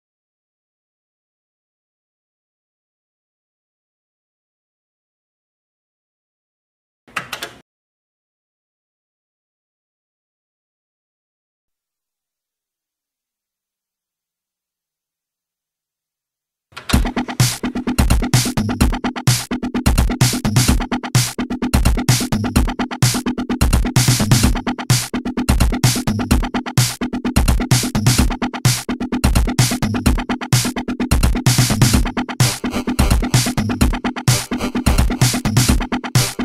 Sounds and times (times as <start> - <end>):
Drum machine: 16.8 - 36.4
Bass drum: 17.0 - 36.4.